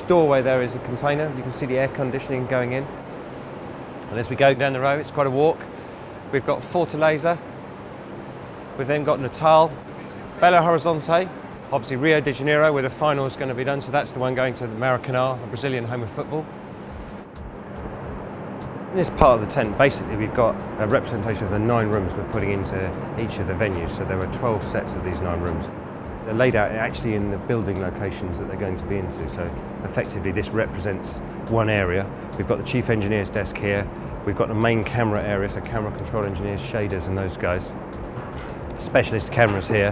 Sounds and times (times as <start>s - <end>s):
Speech: 0.0s - 2.9s, 4.0s - 5.7s, 6.3s - 7.4s, 8.8s - 9.8s, 10.4s - 16.5s, 19.0s - 25.7s, 26.3s - 37.7s, 38.7s - 39.9s.